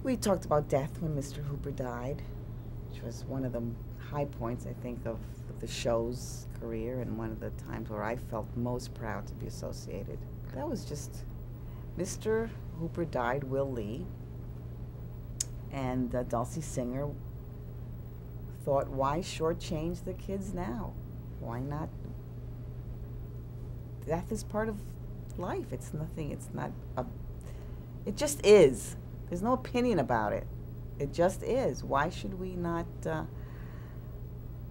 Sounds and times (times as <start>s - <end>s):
Speech: 0.0s - 2.3s, 2.9s - 11.3s, 12.0s - 14.1s, 15.7s - 17.2s, 18.6s - 22.0s, 24.0s - 27.1s, 28.1s - 33.3s
Inside, small room: 0.0s - 34.7s.